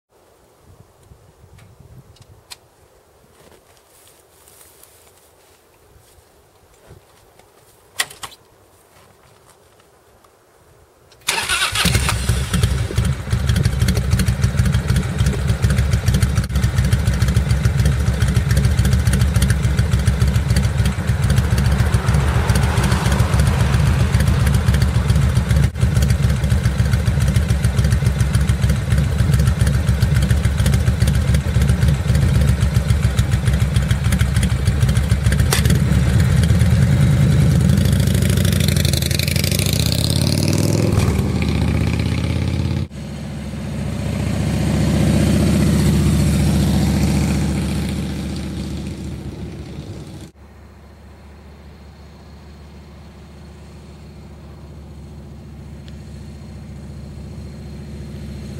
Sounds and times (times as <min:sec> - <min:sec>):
Outside, rural or natural: 0:00.1 - 0:58.5.